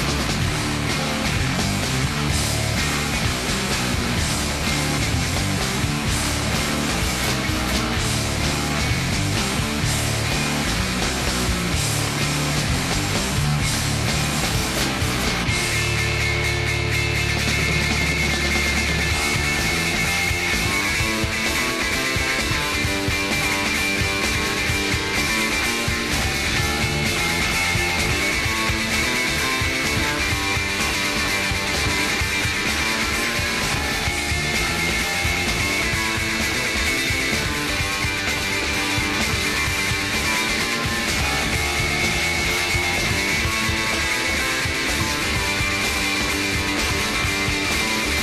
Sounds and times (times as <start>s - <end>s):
Funk: 0.0s - 48.2s.